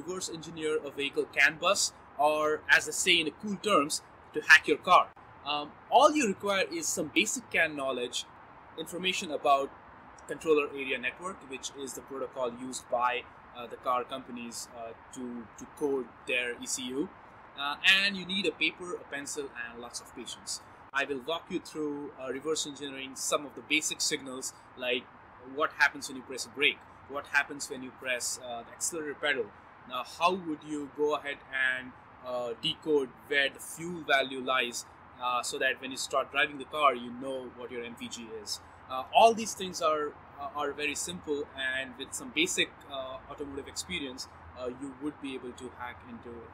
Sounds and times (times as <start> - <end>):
Speech: 0.0 - 8.2, 8.8 - 9.7, 10.3 - 46.5.